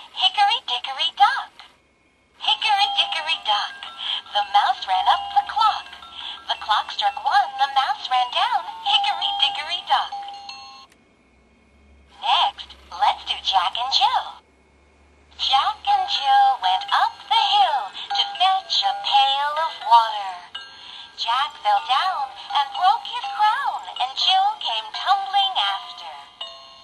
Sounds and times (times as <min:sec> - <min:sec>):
Speech: 0:00.2 - 0:01.7, 0:02.4 - 0:05.9, 0:06.5 - 0:10.2, 0:12.2 - 0:14.4, 0:15.4 - 0:20.5, 0:21.2 - 0:26.4
Music for children: 0:02.4 - 0:11.0, 0:11.8 - 0:14.4, 0:15.2 - 0:26.8.